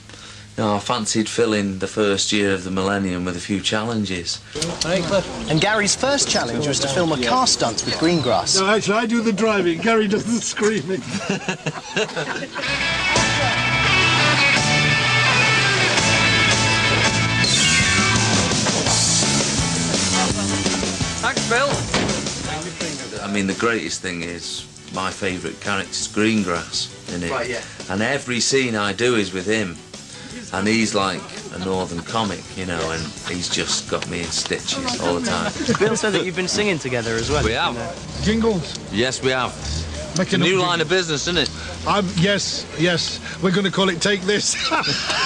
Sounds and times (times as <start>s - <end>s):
Speech: 0.6s - 11.0s, 22.5s - 29.8s, 30.5s - 44.6s
Music: 4.4s - 10.3s, 11.1s - 45.2s.